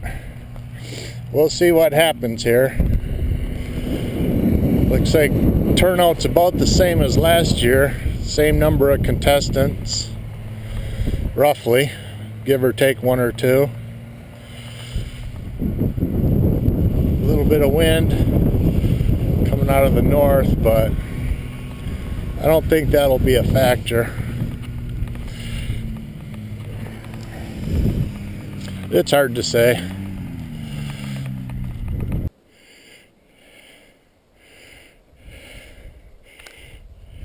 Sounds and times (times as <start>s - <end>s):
Vehicle: 0.0s - 37.2s
Speech: 1.3s - 2.8s, 4.9s - 10.2s, 11.4s - 13.7s, 19.5s - 20.9s, 22.4s - 24.2s, 28.9s - 29.8s.